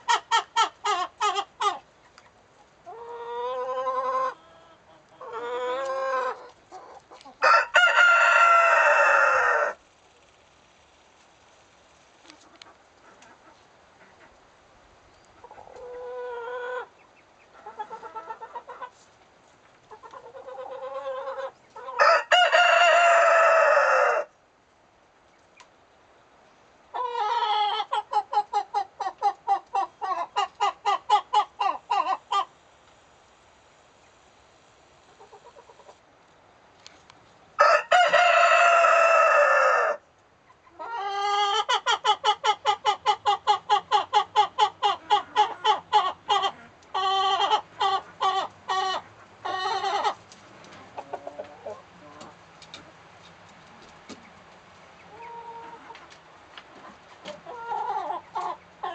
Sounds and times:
Chicken, rooster: 0:00.0 - 0:09.8, 0:12.2 - 0:14.4, 0:15.1 - 0:24.4, 0:26.9 - 0:32.5, 0:35.0 - 0:36.0, 0:37.6 - 0:58.9.

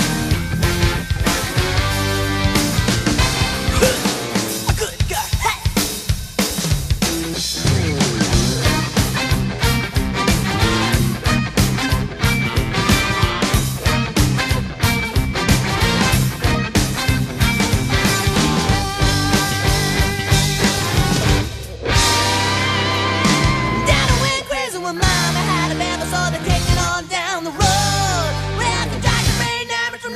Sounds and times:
Music: 0:00.0 - 0:30.1.

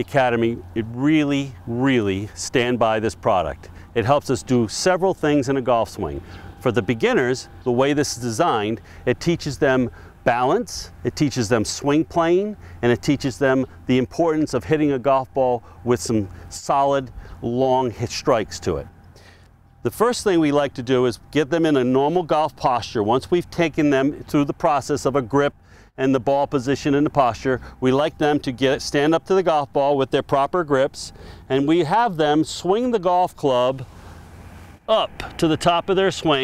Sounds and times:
Speech: 0:00.0 - 0:18.9, 0:19.8 - 0:33.8, 0:34.9 - 0:36.4.

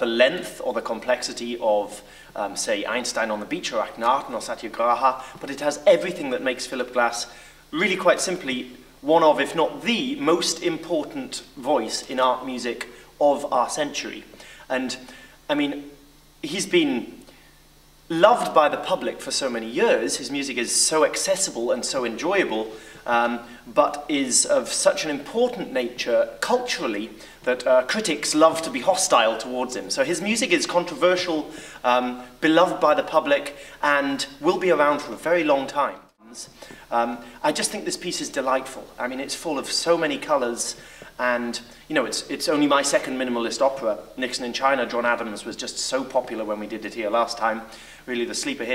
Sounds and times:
Speech: 0:00.0 - 0:17.3, 0:18.1 - 0:48.7.

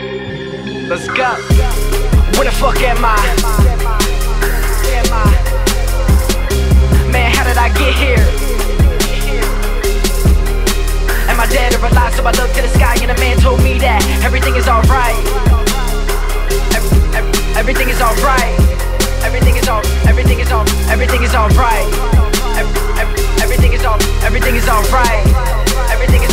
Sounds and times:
Background music: 0:00.0 - 0:26.3
Soundtrack music: 0:00.0 - 0:26.3
Rhythm and blues: 0:00.1 - 0:26.3.

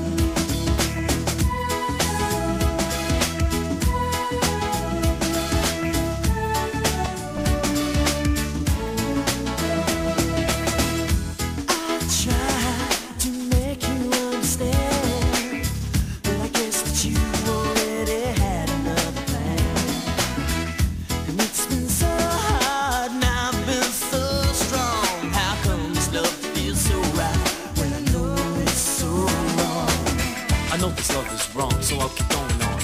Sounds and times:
Music: 0:00.0 - 0:32.8.

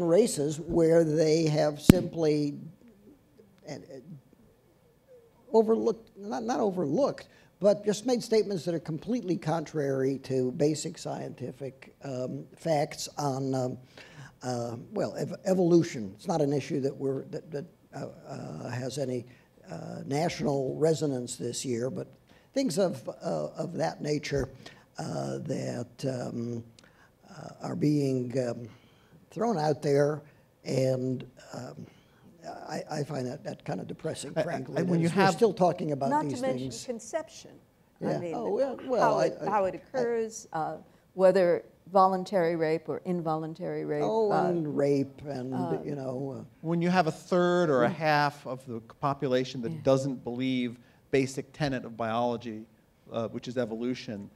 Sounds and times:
Speech: 0:14.4 - 0:26.6, 0:32.4 - 0:37.2, 0:38.0 - 0:40.8, 0:43.8 - 0:54.3.

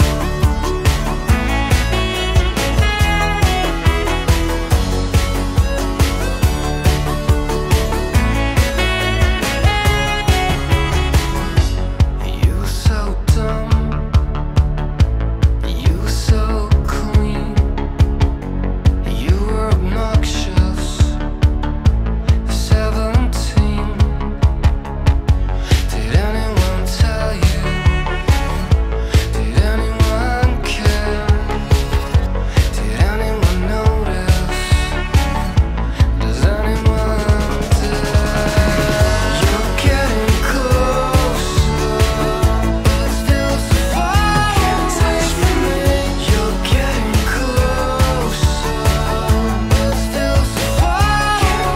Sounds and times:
Music: 0:00.0 - 0:51.7.

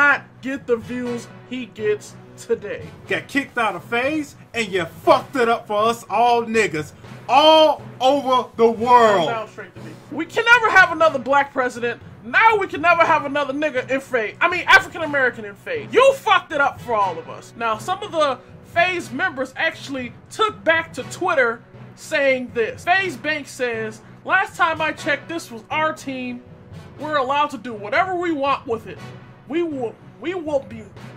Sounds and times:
Speech: 0:00.0 - 0:26.4, 0:27.0 - 0:31.0
Music: 0:00.0 - 0:31.1.

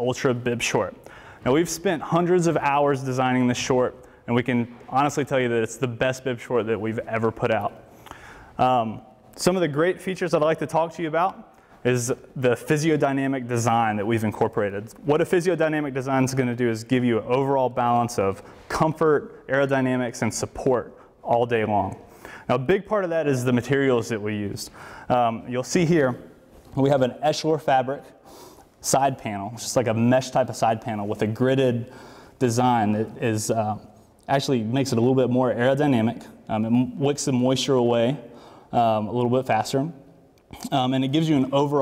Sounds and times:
Speech: 0:00.0 - 0:07.8, 0:08.6 - 0:28.2, 0:28.8 - 0:41.8.

